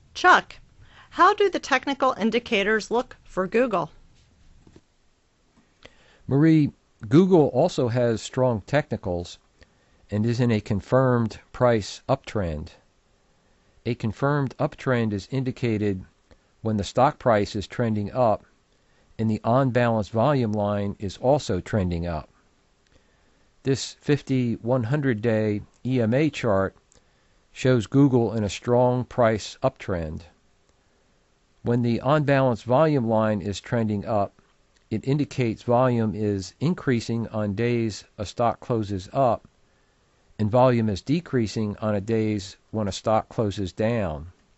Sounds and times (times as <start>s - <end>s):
Speech: 0.2s - 0.6s, 1.2s - 4.0s, 6.3s - 9.4s, 10.1s - 12.8s, 13.9s - 18.4s, 19.2s - 22.3s, 23.7s - 26.8s, 27.6s - 30.4s, 31.7s - 39.5s, 40.4s - 44.4s.